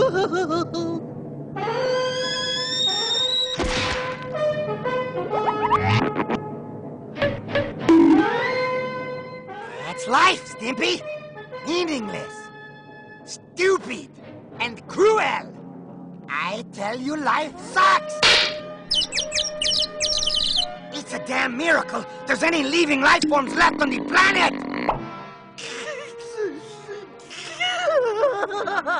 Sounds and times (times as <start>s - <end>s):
Chirp, tweet: 18.9s - 20.7s.